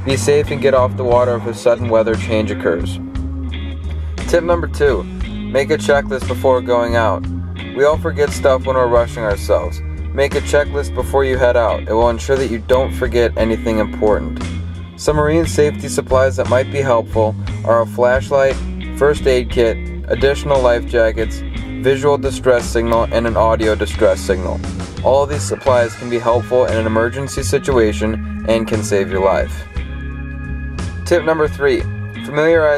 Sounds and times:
Speech: 0.0 - 3.0, 4.3 - 7.2, 7.8 - 14.4, 15.0 - 29.6, 31.1 - 32.7
Music: 0.0 - 32.7.

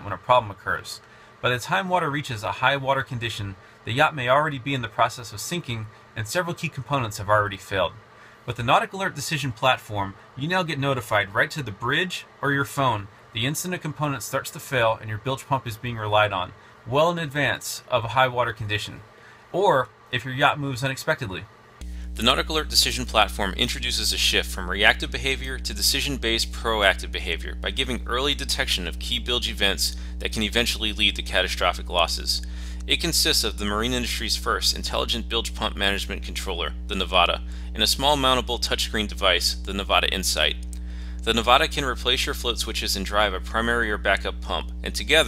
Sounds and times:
Speech: 0.0 - 21.5, 22.2 - 40.6, 41.2 - 45.2.

